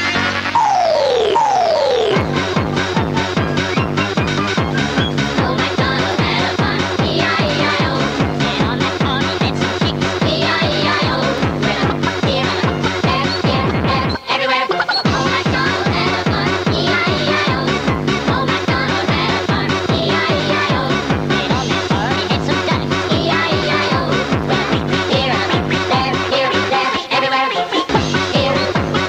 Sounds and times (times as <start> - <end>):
Techno: 0.0 - 29.0.